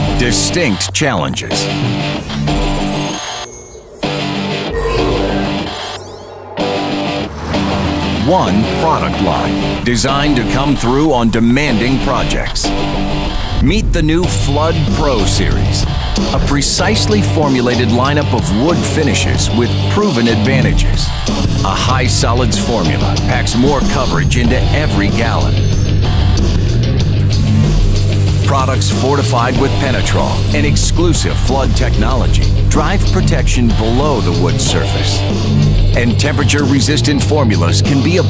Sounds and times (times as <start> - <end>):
Speech: 0.0 - 1.8, 8.2 - 12.8, 13.6 - 21.1, 21.7 - 25.6, 28.5 - 35.3, 36.0 - 38.3
Music: 0.0 - 38.3.